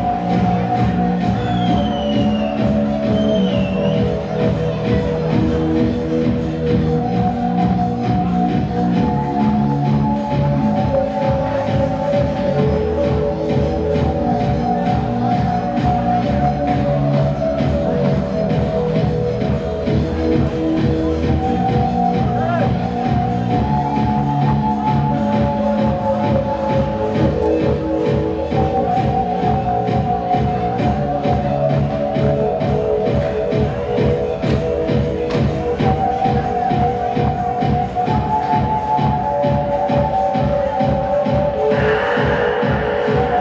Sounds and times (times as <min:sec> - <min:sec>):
Techno: 0:00.0 - 0:43.4.